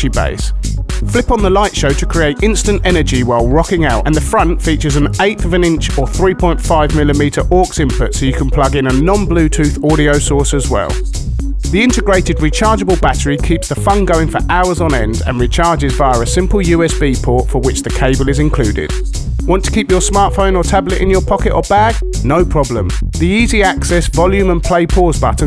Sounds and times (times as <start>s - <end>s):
Speech: 0.0s - 11.1s, 11.7s - 25.4s
Music: 0.0s - 25.4s.